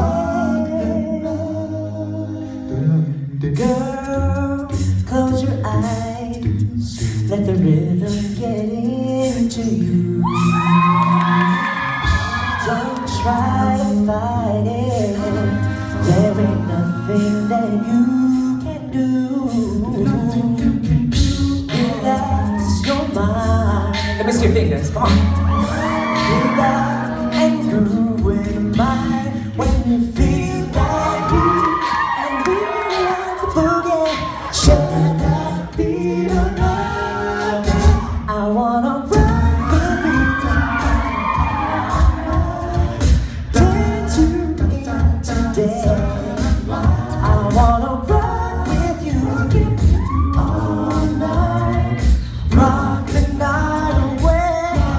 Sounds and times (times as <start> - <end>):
Singing: 0.0 - 54.9
Vocal music: 0.0 - 54.9
Speech: 24.2 - 25.2.